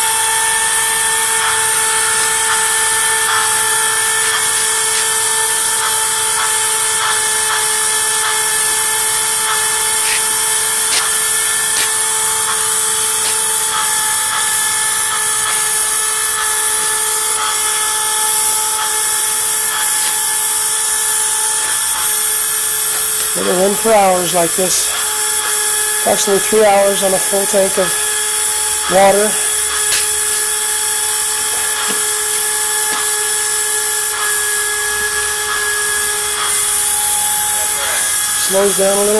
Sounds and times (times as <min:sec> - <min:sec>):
Steam: 0:00.0 - 0:39.1.